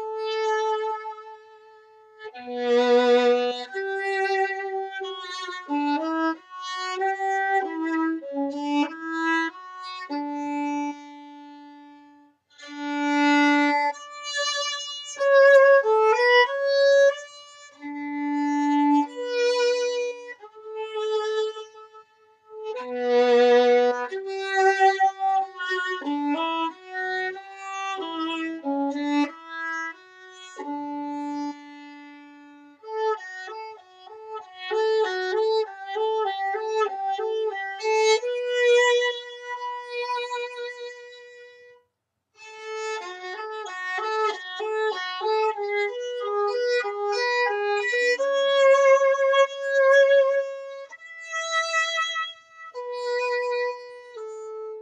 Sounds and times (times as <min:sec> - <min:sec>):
Violin, fiddle: 0:00.0 - 0:41.8, 0:42.4 - 0:54.8.